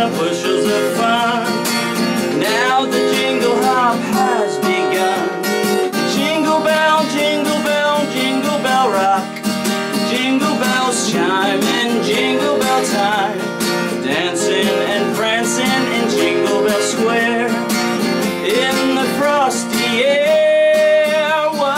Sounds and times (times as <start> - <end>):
Music: 0.0 - 21.7.